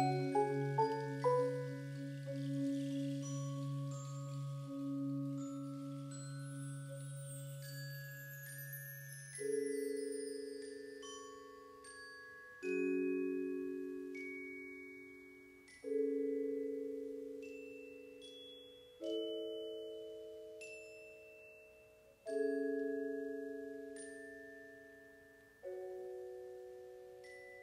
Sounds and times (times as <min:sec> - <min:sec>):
Glockenspiel: 0:00.0 - 0:27.6
Marimba, xylophone: 0:00.0 - 0:27.6.